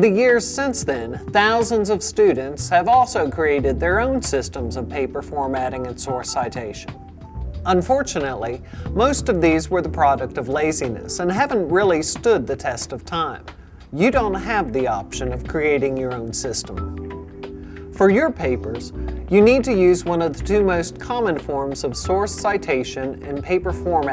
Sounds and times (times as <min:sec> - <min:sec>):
Speech: 0:00.0 - 0:06.9, 0:07.7 - 0:16.8, 0:18.0 - 0:24.1
Music: 0:00.0 - 0:24.1.